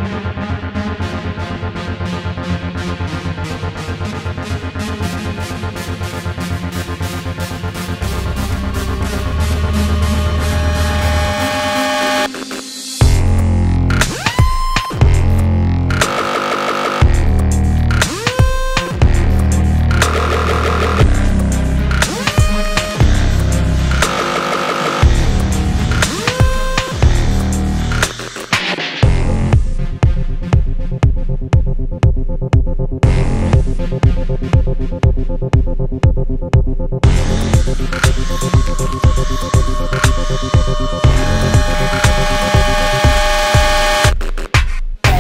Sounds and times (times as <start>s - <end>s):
Music: 0.0s - 45.2s.